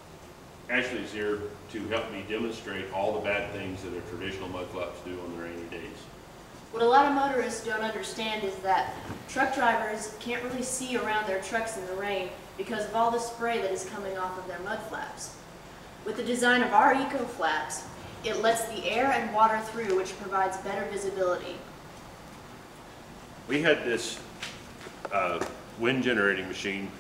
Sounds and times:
Speech: 0:00.7 - 0:06.1, 0:06.8 - 0:15.4, 0:16.1 - 0:21.6, 0:23.5 - 0:24.2, 0:25.1 - 0:27.0.

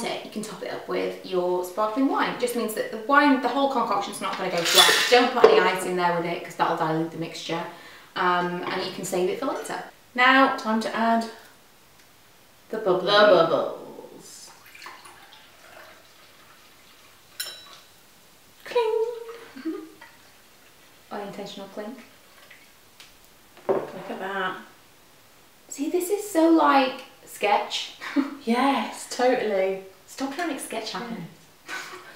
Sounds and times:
Speech: 0:00.0 - 0:11.4, 0:12.7 - 0:14.5, 0:18.6 - 0:19.3, 0:21.1 - 0:22.1, 0:23.8 - 0:24.7, 0:25.7 - 0:31.4
Inside, small room: 0:00.0 - 0:32.1.

